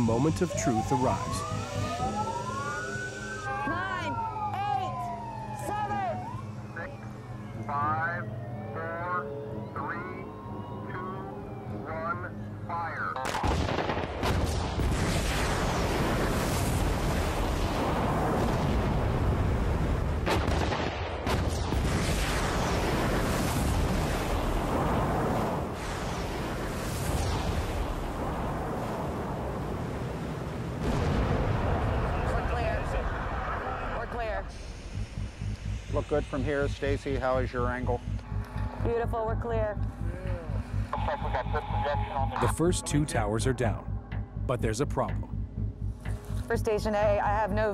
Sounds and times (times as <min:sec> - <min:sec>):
Explosion: 0:13.2 - 0:36.4.